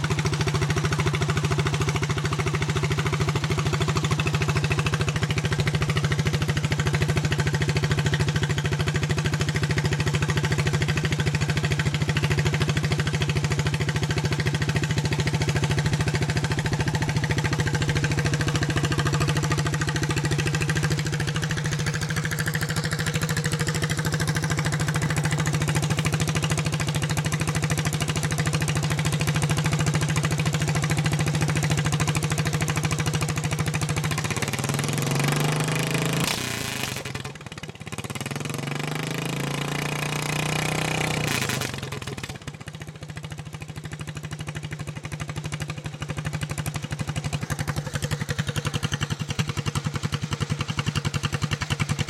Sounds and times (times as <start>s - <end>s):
Vehicle: 0.0s - 52.0s.